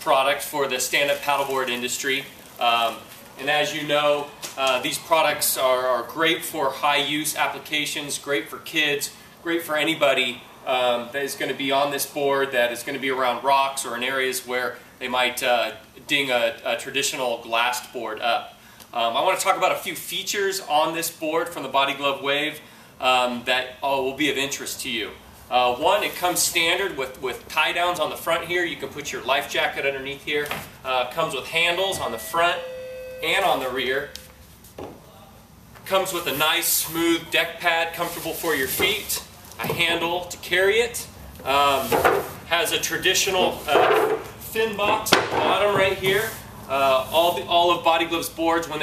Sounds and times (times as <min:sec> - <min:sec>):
Speech: 0:00.0 - 0:32.6, 0:33.2 - 0:34.2, 0:35.0 - 0:48.8.